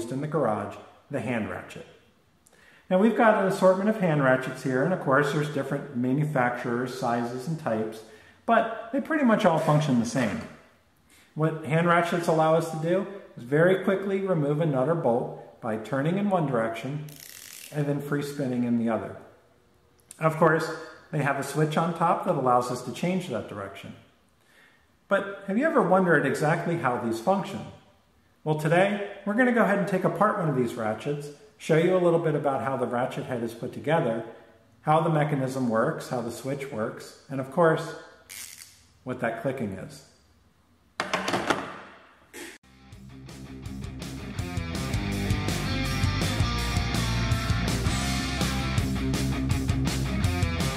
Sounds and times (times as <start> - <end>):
Speech: 0.0 - 2.0, 2.9 - 10.6, 11.4 - 17.1, 17.7 - 19.3, 20.1 - 24.1, 25.1 - 38.1, 39.0 - 40.2.